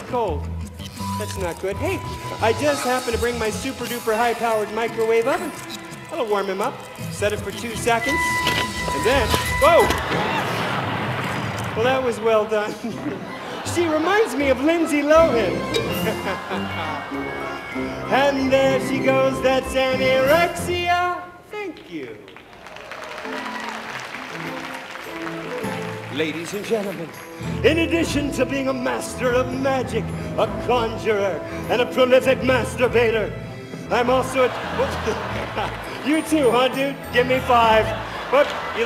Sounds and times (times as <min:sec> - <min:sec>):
Music: 0:00.0 - 0:21.5, 0:22.4 - 0:38.8.